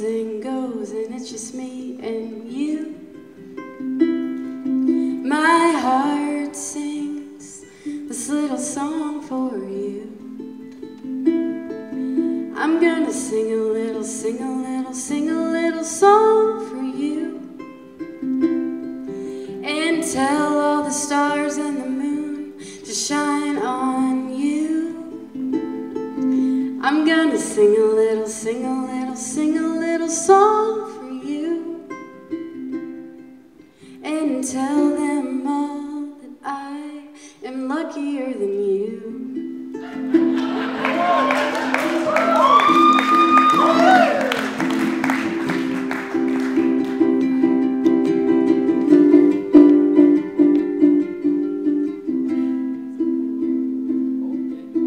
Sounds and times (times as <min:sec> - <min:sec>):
Ukulele: 0:00.0 - 0:54.8.